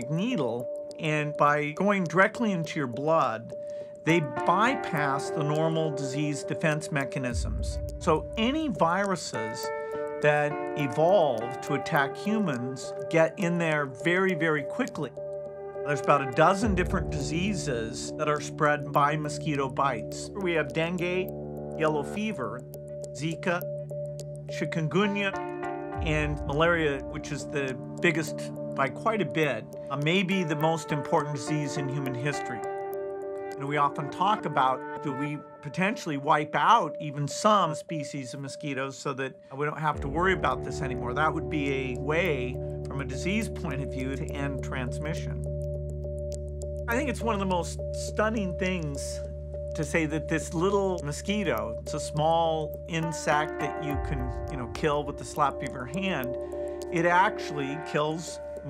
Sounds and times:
Speech: 0.0 - 15.1, 15.9 - 22.6, 23.2 - 23.6, 24.5 - 25.4, 26.0 - 32.7, 33.6 - 45.4, 46.9 - 49.2, 49.8 - 58.7
Music: 0.0 - 58.7.

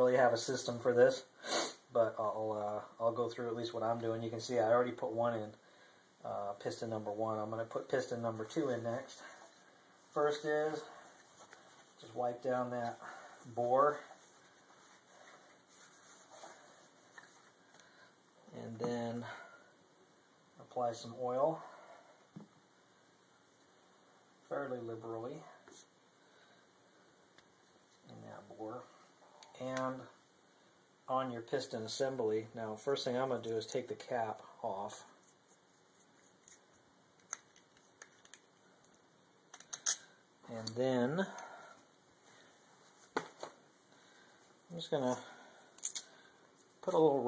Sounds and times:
Speech: 0.0 - 1.3, 1.9 - 5.6, 6.2 - 9.3, 10.1 - 11.0, 12.0 - 14.1, 18.5 - 19.4, 20.6 - 21.7, 24.5 - 25.6, 28.0 - 30.2, 31.1 - 35.2, 40.5 - 41.4, 44.7 - 45.4, 46.8 - 47.2.

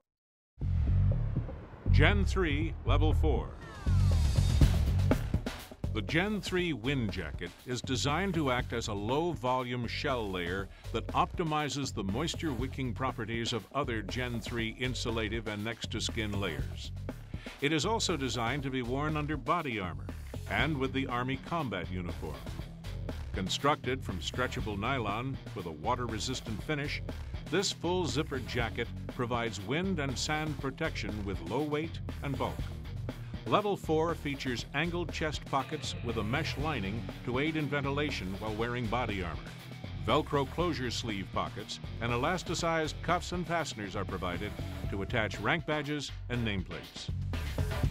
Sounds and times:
Music: 0.6 - 47.9
Speech: 1.9 - 3.7, 6.0 - 16.9, 17.6 - 22.5, 23.4 - 32.7, 33.5 - 47.1.

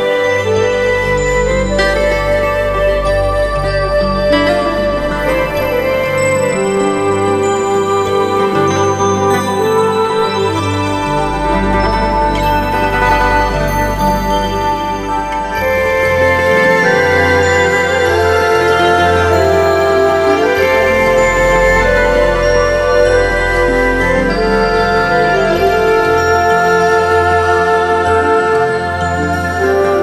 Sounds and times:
Wedding music: 0.0 - 30.0.

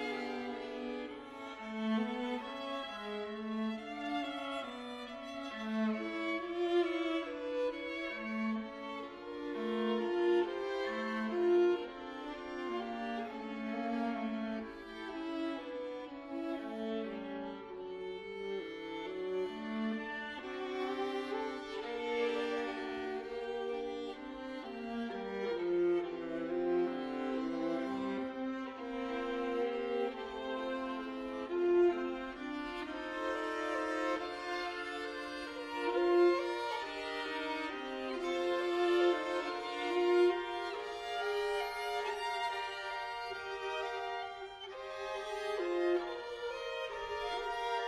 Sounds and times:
Violin, fiddle: 0.0 - 47.8.

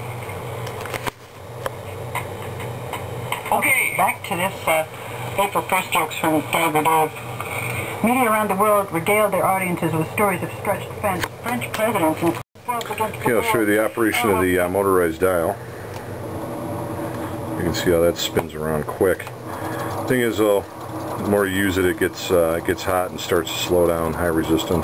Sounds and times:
Radio: 3.3 - 15.6
Speech: 3.5 - 7.2, 8.0 - 15.6, 17.6 - 19.3, 20.1 - 24.8.

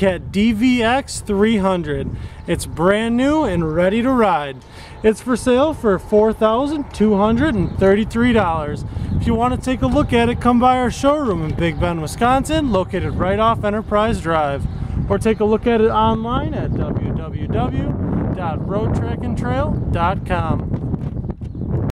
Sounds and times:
Speech: 0.0 - 20.7.

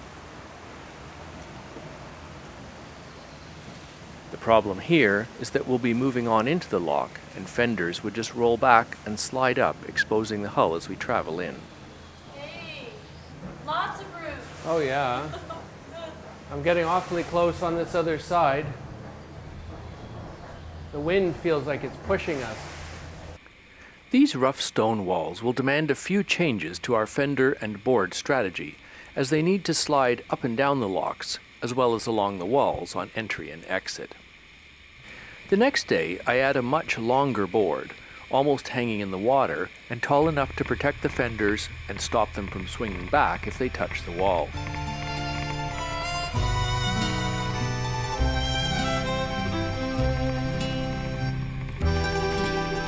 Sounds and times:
Speech: 4.4 - 11.6, 16.0 - 18.8, 20.9 - 22.6, 24.2 - 34.2, 35.5 - 44.6.

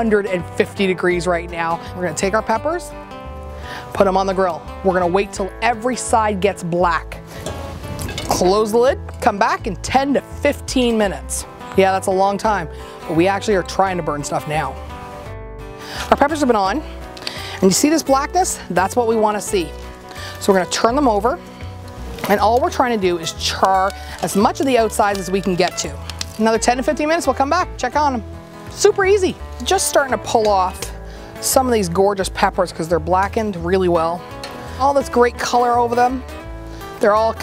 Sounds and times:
Speech: 0.0 - 2.9, 4.0 - 7.2, 8.3 - 14.8, 16.1 - 16.8, 17.6 - 19.7, 20.4 - 21.4, 22.2 - 28.2, 28.8 - 34.2, 34.8 - 36.2, 37.0 - 37.4
Music: 0.0 - 37.4.

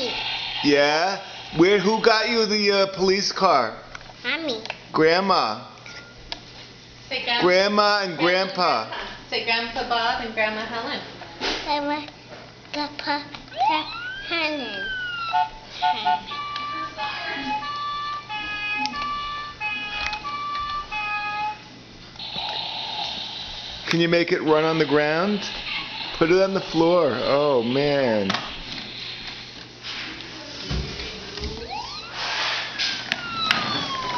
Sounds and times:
Police car (siren): 13.5 - 21.6, 31.6 - 34.1.

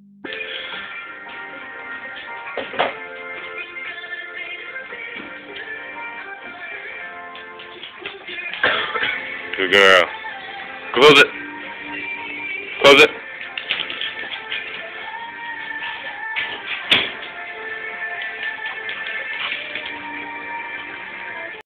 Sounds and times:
Music: 0.2 - 21.6
Speech: 9.6 - 10.1, 12.8 - 13.2.

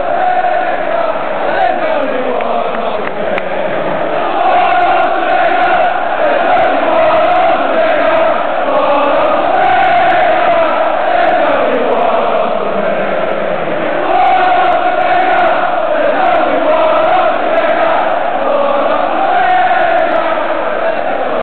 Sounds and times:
Male singing: 0.0 - 21.4.

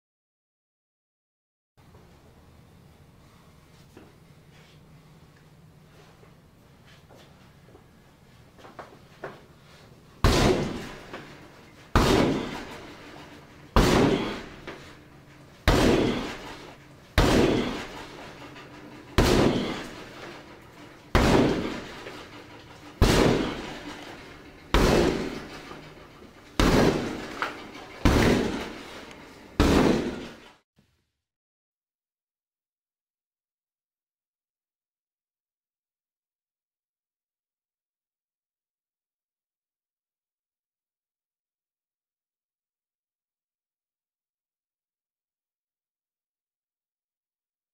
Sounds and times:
Door: 15.7 - 30.5.

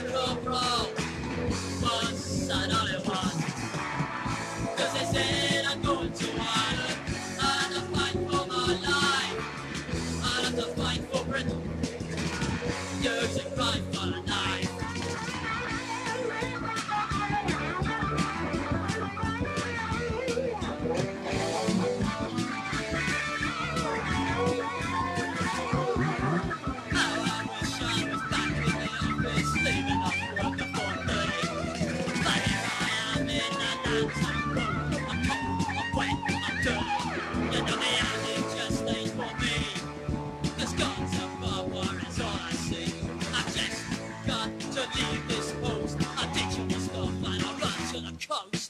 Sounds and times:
Punk rock: 0.0 - 48.7.

